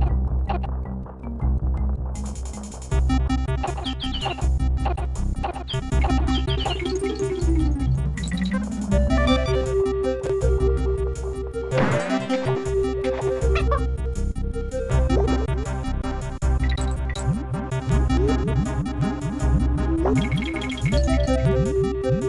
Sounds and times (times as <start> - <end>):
Music: 0.0 - 22.2.